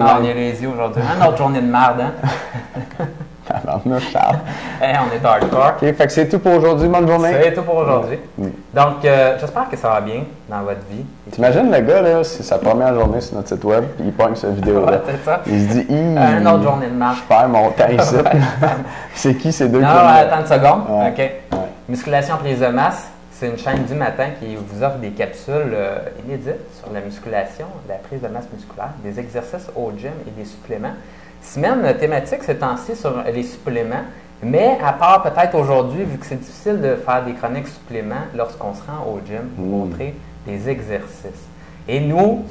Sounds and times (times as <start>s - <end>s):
Speech: 0.0s - 2.3s, 3.5s - 42.5s.